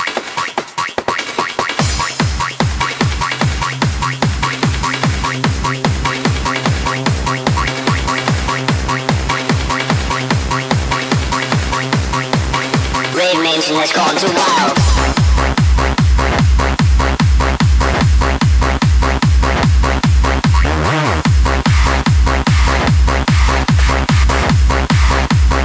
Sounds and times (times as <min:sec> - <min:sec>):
Music: 0:00.0 - 0:25.6.